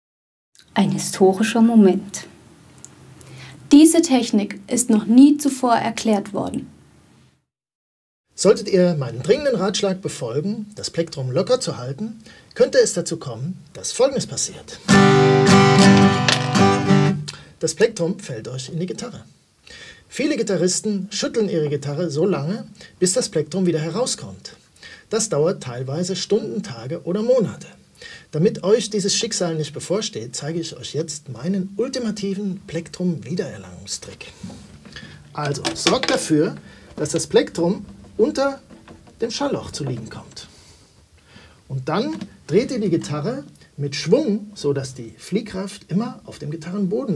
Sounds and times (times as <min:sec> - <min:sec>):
Speech: 0:00.6 - 0:02.4, 0:03.7 - 0:06.7, 0:08.4 - 0:14.8, 0:17.6 - 0:19.3, 0:20.1 - 0:34.4, 0:35.3 - 0:40.5, 0:41.7 - 0:47.1.